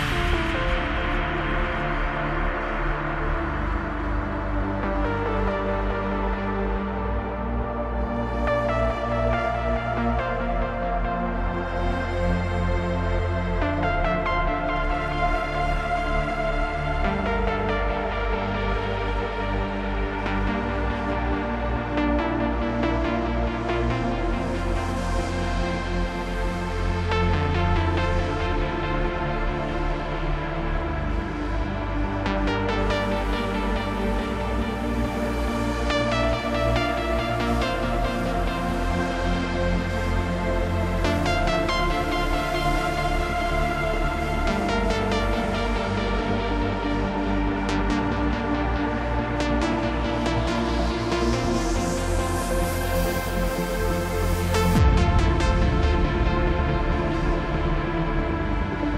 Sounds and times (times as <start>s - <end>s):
Techno: 0.0s - 58.9s.